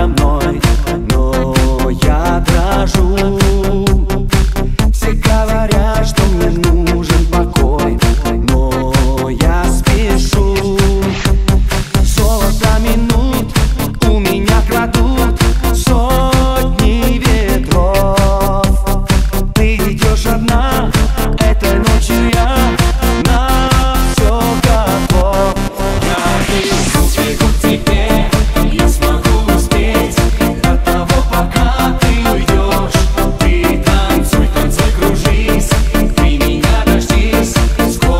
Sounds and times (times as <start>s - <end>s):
Music: 0.0s - 38.1s.